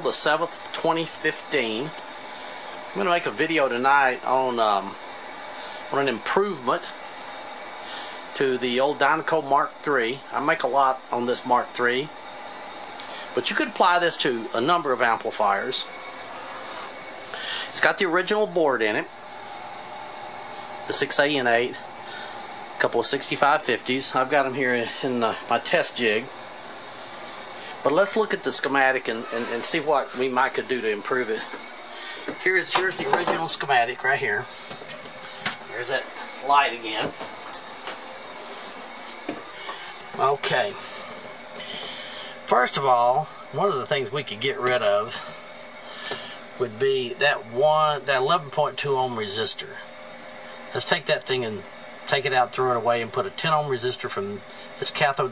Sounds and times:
Speech: 0:00.0 - 0:02.0, 0:03.0 - 0:05.0, 0:05.9 - 0:07.0, 0:08.4 - 0:12.2, 0:13.3 - 0:15.9, 0:17.7 - 0:19.1, 0:20.9 - 0:21.8, 0:22.8 - 0:26.3, 0:27.8 - 0:31.5, 0:32.4 - 0:34.5, 0:35.7 - 0:37.2, 0:40.2 - 0:41.0, 0:42.5 - 0:45.3, 0:46.6 - 0:49.9, 0:50.7 - 0:55.3.

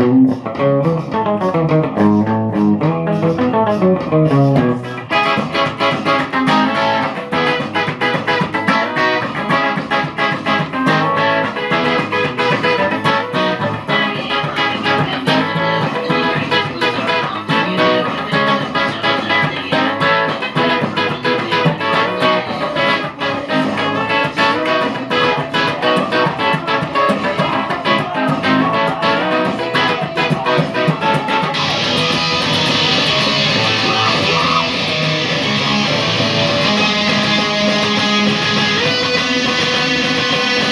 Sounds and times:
Music: 0:00.0 - 0:40.7.

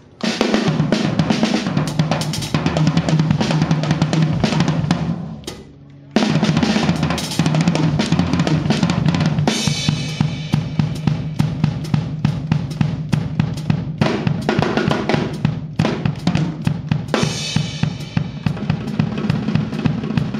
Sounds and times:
Snare drum: 0:00.0 - 0:05.6, 0:06.2 - 0:20.3
Drum kit: 0:00.0 - 0:20.3
Cymbal: 0:06.2 - 0:20.3.

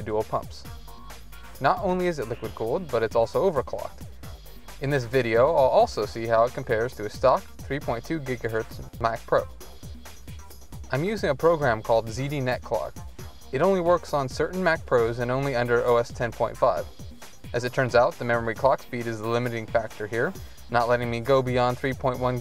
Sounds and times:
Speech: 0:00.0 - 0:00.7, 0:01.6 - 0:04.0, 0:04.8 - 0:09.5, 0:10.9 - 0:12.9, 0:13.6 - 0:16.9, 0:17.5 - 0:22.4
Music: 0:00.0 - 0:22.4.

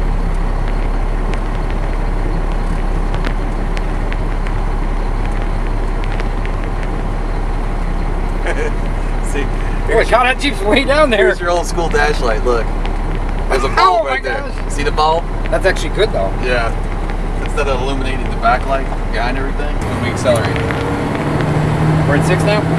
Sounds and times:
Outside, urban or manmade: 0:00.0 - 0:22.7
Vehicle: 0:00.0 - 0:22.7
Speech: 0:08.4 - 0:12.7, 0:13.5 - 0:16.8, 0:17.4 - 0:20.7, 0:22.1 - 0:22.7.

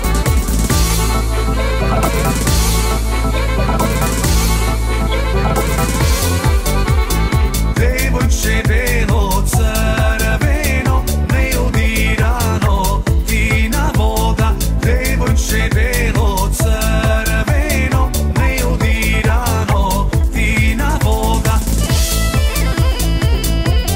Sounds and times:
Disco: 0:00.0 - 0:23.9.

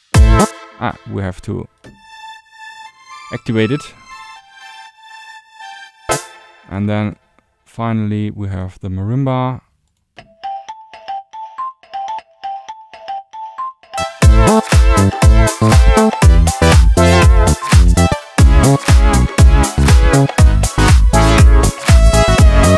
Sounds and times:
Synthesizer: 0:00.0 - 0:06.8, 0:10.4 - 0:22.7
Speech: 0:00.8 - 0:01.7, 0:03.3 - 0:04.0, 0:06.7 - 0:09.7.

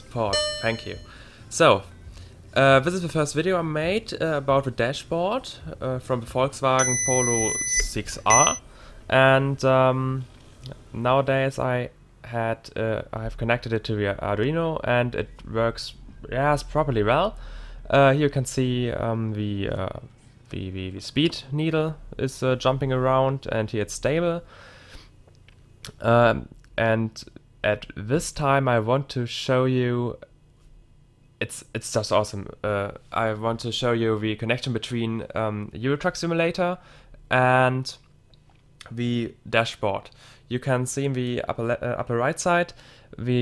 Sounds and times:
Speech: 0:00.0 - 0:01.9, 0:02.6 - 0:24.5, 0:25.9 - 0:30.3, 0:31.4 - 0:38.0, 0:38.8 - 0:43.4.

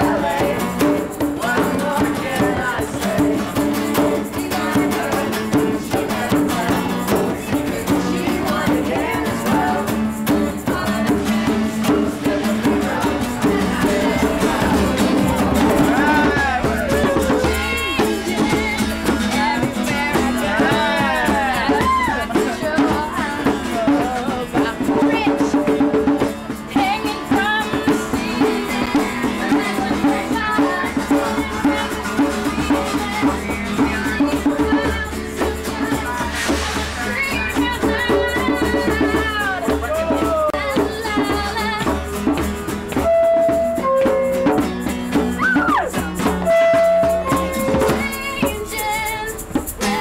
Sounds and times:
Male singing: 0:00.0 - 0:10.0, 0:10.7 - 0:41.7
Choir: 0:00.0 - 0:42.4
Female singing: 0:00.0 - 0:42.4, 0:45.4 - 0:50.0.

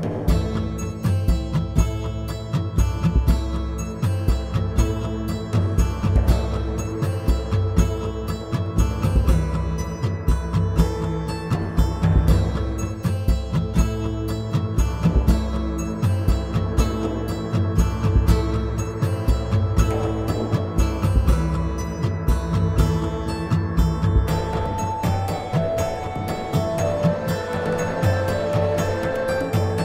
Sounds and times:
Music: 0:00.0 - 0:29.8.

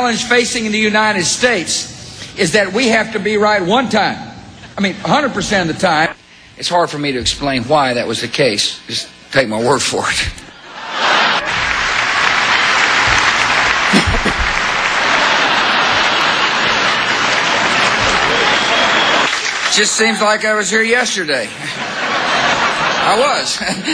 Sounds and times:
Male speech, man speaking: 0:00.0 - 0:10.5, 0:19.7 - 0:21.6, 0:23.0 - 0:23.8.

